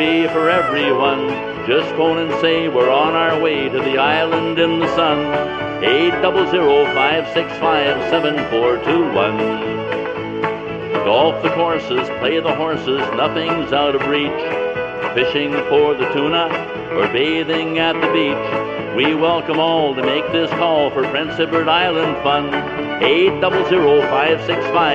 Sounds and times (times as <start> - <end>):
Music: 0.0 - 24.9.